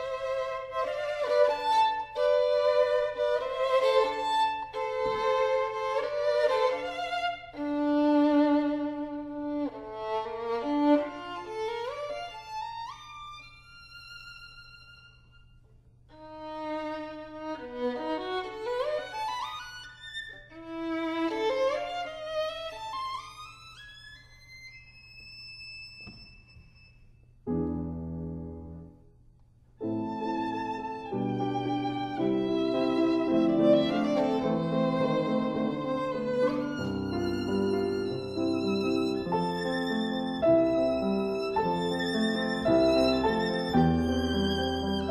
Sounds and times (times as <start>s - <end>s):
Violin, fiddle: 0.0s - 27.0s, 29.8s - 45.1s.